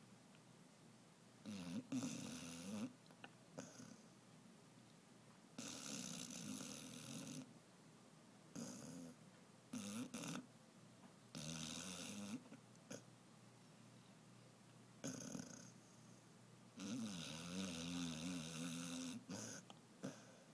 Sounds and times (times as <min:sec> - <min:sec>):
Dog: 0:01.4 - 0:02.9, 0:05.6 - 0:07.5, 0:08.6 - 0:10.5, 0:11.3 - 0:13.0, 0:16.8 - 0:20.4
Snoring: 0:01.4 - 0:03.0, 0:03.6 - 0:04.0, 0:05.6 - 0:07.5, 0:08.6 - 0:09.2, 0:09.8 - 0:10.5, 0:11.4 - 0:13.0, 0:15.0 - 0:15.8, 0:16.8 - 0:20.4.